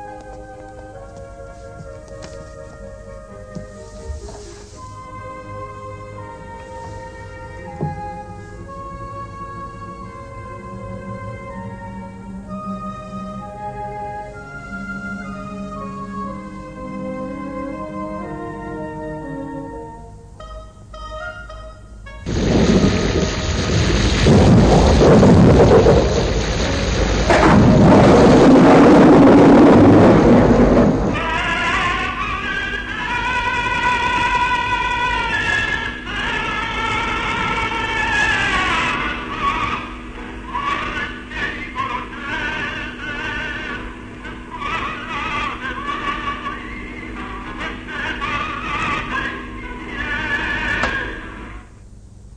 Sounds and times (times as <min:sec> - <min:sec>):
Music: 0:00.0 - 0:24.1, 0:29.0 - 0:52.0.